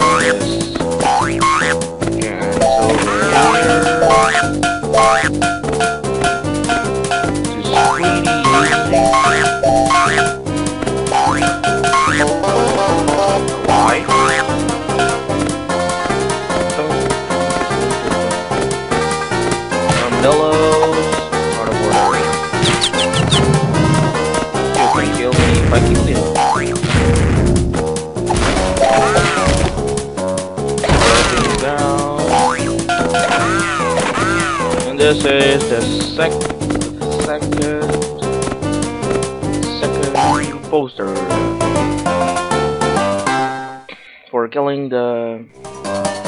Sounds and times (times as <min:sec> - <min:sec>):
Speech: 0:00.0 - 0:00.8, 0:02.2 - 0:04.1, 0:07.6 - 0:09.1, 0:13.7 - 0:14.1, 0:20.0 - 0:22.3, 0:24.8 - 0:26.3, 0:31.0 - 0:32.3, 0:34.9 - 0:36.4, 0:37.0 - 0:38.1, 0:39.7 - 0:41.4, 0:44.1 - 0:45.5
Music: 0:00.0 - 0:46.2.